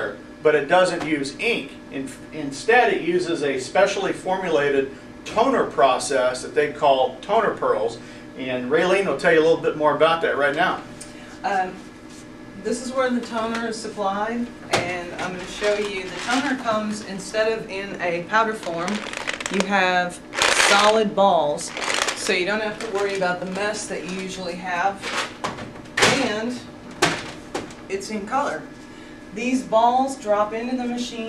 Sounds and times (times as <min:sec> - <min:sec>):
Speech: 0:00.0 - 0:10.8, 0:11.4 - 0:11.8, 0:12.6 - 0:25.0, 0:29.4 - 0:31.2.